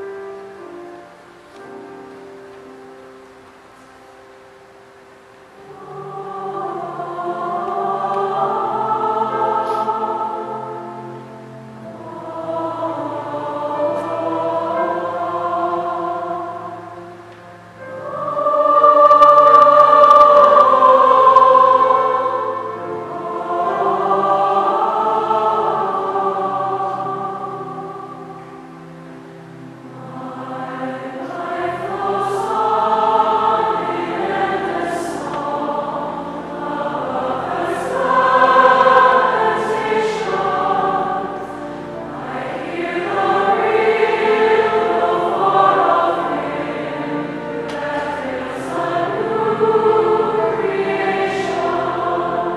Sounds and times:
Choir: 0:00.0 - 0:52.5.

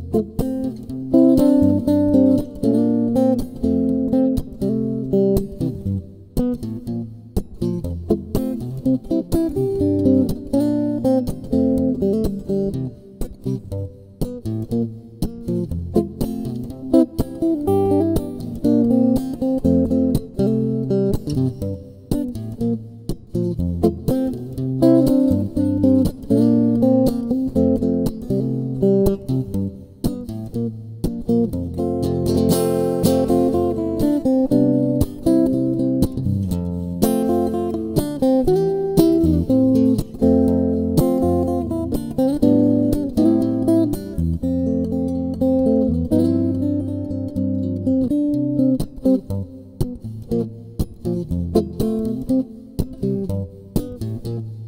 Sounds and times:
Acoustic guitar: 0:00.0 - 0:54.6.

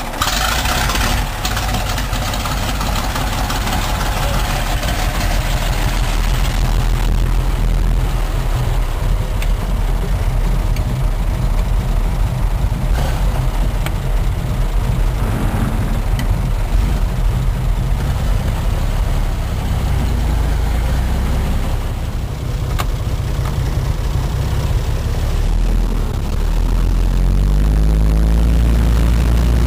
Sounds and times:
Car: 0:00.0 - 0:29.6.

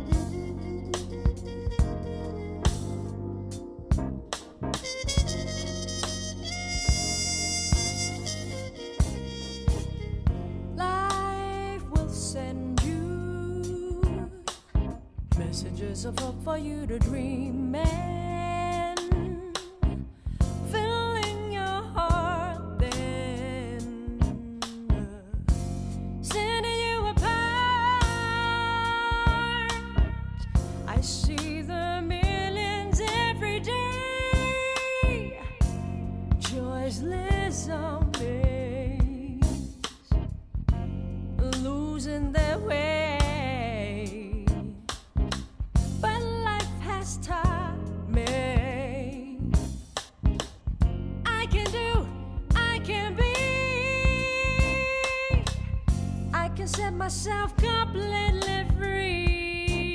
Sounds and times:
Independent music: 0:00.0 - 0:59.9.

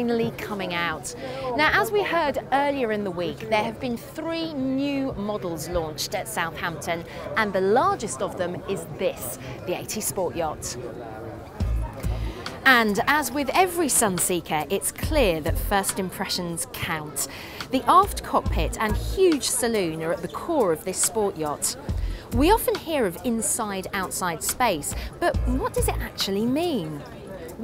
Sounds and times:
Speech: 0:00.0 - 0:27.6
Music: 0:11.4 - 0:27.6.

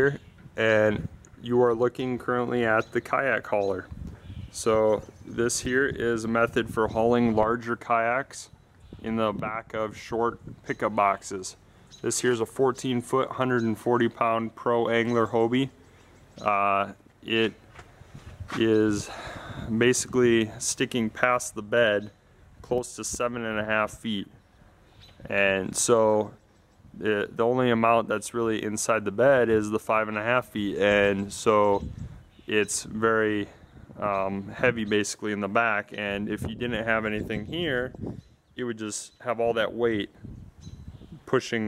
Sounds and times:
Speech: 0:00.0 - 0:03.9, 0:04.6 - 0:15.8, 0:16.4 - 0:17.6, 0:18.5 - 0:24.3, 0:25.2 - 0:26.4, 0:27.0 - 0:31.9, 0:32.5 - 0:38.0, 0:38.6 - 0:40.2, 0:41.3 - 0:41.6.

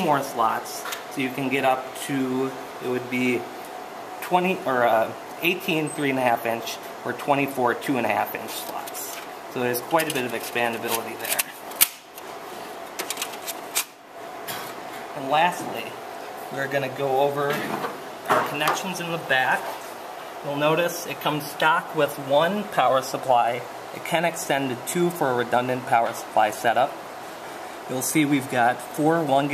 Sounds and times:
Speech: 0:00.0 - 0:03.5, 0:04.2 - 0:11.6, 0:15.2 - 0:19.8, 0:20.4 - 0:27.0, 0:27.9 - 0:29.5.

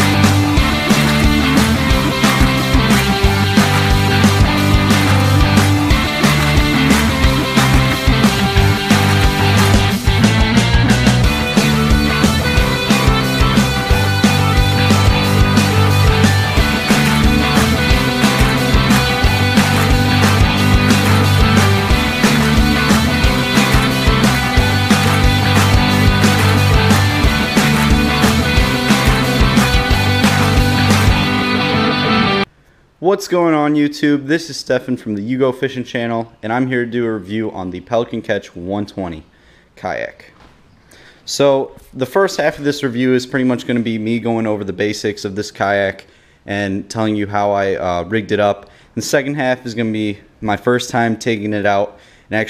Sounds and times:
Music: 0:00.0 - 0:32.5.

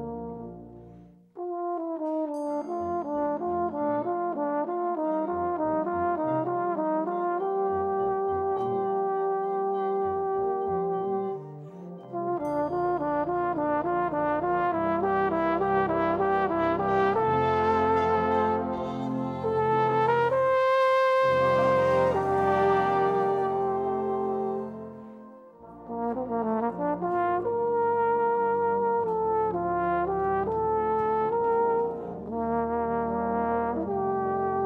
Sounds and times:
Trumpet: 0:00.0 - 0:34.6.

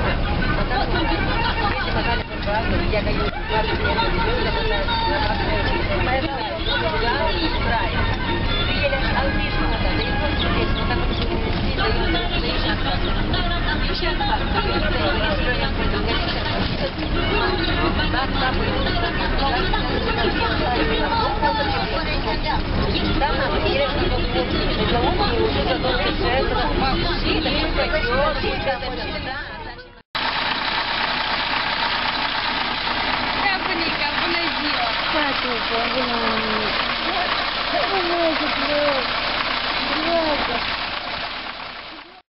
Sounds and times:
Speech: 0:00.0 - 0:30.0, 0:33.4 - 0:40.7
Vehicle: 0:00.0 - 0:42.3.

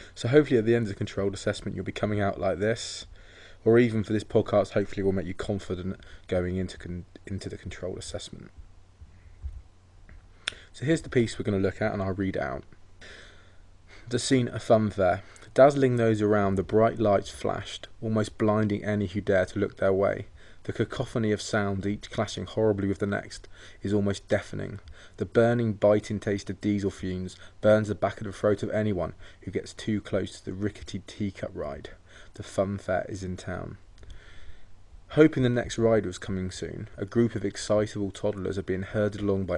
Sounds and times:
Speech: 0:00.0 - 0:08.6, 0:10.8 - 0:12.7, 0:14.1 - 0:33.8, 0:35.1 - 0:39.5.

